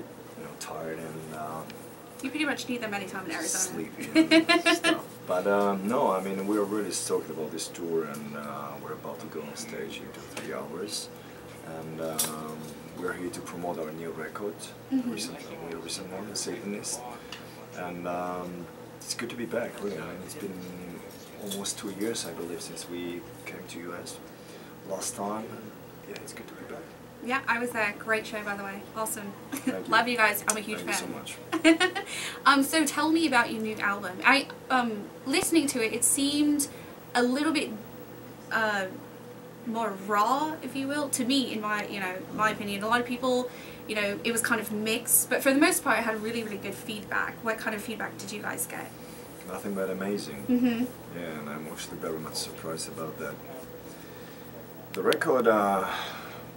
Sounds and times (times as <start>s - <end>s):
Speech: 0.4s - 4.1s, 17.8s - 22.9s, 25.0s - 31.3s, 55.0s - 55.9s.